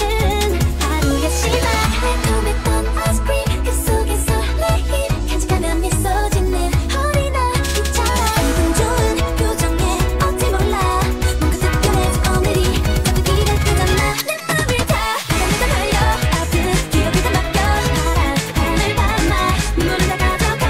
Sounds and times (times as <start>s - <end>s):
Music: 0.0s - 20.7s.